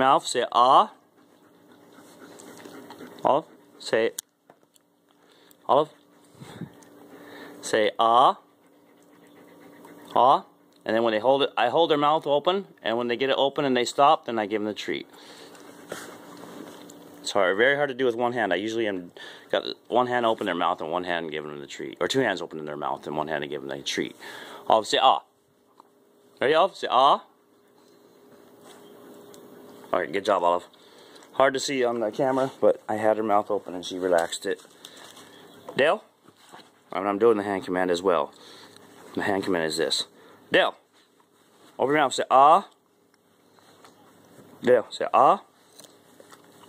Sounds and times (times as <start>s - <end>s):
Speech: 0.0s - 1.0s, 3.2s - 4.2s, 5.7s - 6.0s, 7.6s - 8.4s, 10.1s - 15.1s, 17.2s - 25.3s, 26.4s - 27.3s, 29.9s - 30.7s, 31.4s - 34.7s, 35.7s - 36.1s, 36.9s - 38.4s, 39.1s - 40.8s, 41.8s - 42.8s, 44.6s - 45.5s.